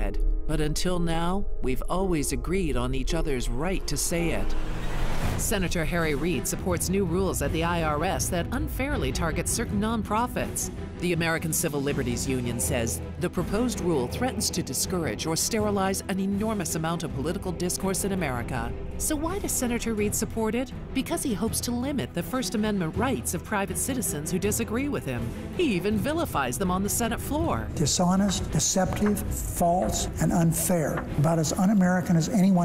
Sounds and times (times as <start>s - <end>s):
Music: 0.0s - 32.6s
Female speech, woman speaking: 0.5s - 4.5s, 5.4s - 27.7s.